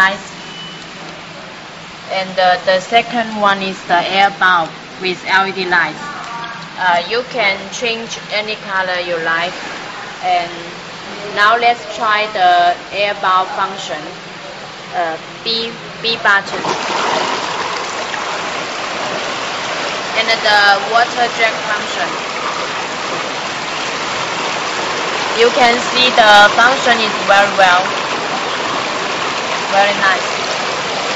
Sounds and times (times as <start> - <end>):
Speech: 0.0 - 0.3, 2.1 - 9.6, 10.2 - 14.2, 14.9 - 16.7, 20.2 - 22.2, 25.4 - 27.9, 29.7 - 30.3.